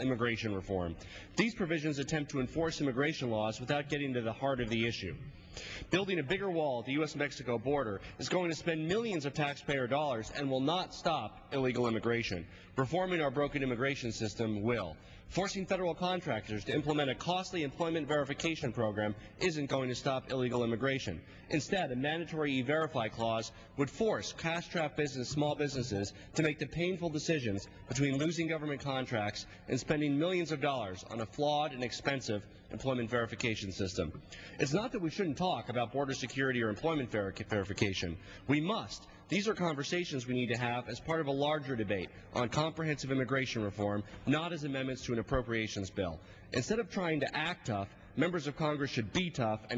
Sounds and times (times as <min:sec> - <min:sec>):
Male speech, man speaking: 0:00.0 - 0:05.2, 0:05.9 - 0:49.7
Narration, monologue: 0:00.0 - 0:49.7.